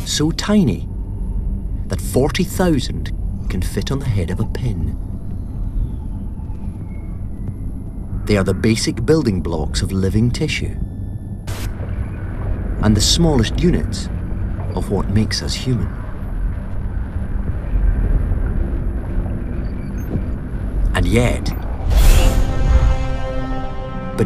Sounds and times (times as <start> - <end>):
Speech: 0.0 - 0.9, 1.9 - 5.0, 8.3 - 10.8, 12.8 - 14.1, 14.7 - 15.9, 20.9 - 21.6.